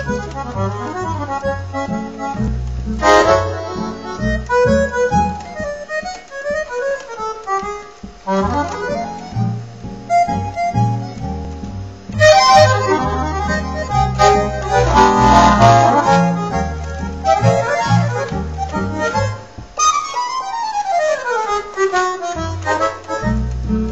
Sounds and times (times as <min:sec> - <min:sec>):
Accordion: 0:00.0 - 0:23.9
Traditional music: 0:00.0 - 0:23.9.